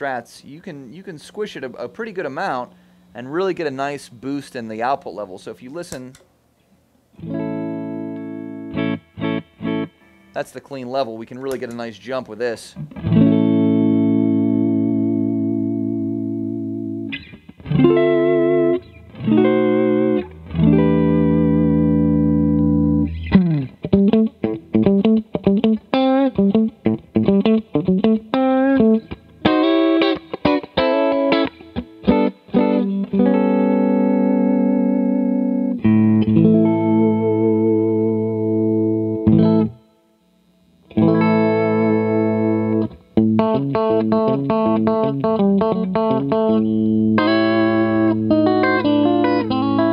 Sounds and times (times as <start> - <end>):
Guitar: 0.0 - 49.9
Inside, small room: 0.0 - 49.9
Effects unit: 6.6 - 10.4, 12.7 - 49.9.